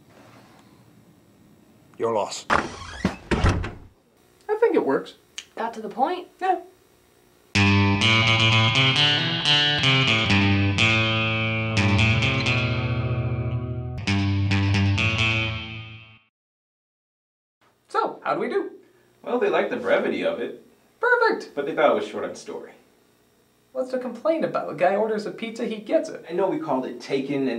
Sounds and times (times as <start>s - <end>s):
Effects unit: 7.6s - 16.3s.